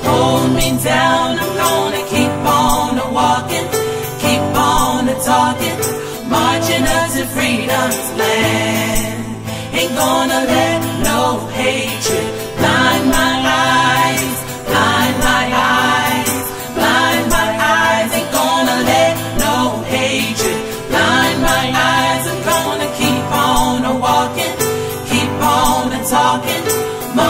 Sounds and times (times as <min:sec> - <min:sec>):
Country: 0:00.0 - 0:27.3.